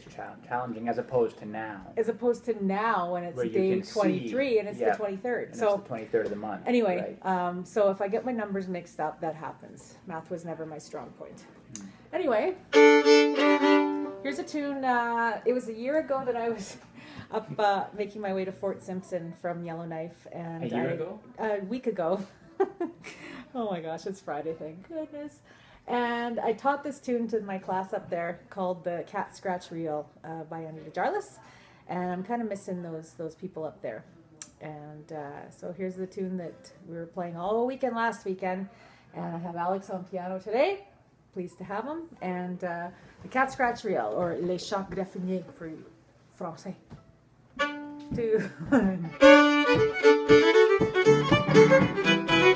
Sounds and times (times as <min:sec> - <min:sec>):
Speech: 0:03.3 - 0:11.5
Violin, fiddle: 0:12.7 - 0:14.4, 0:47.6 - 0:48.2, 0:49.1 - 0:52.5.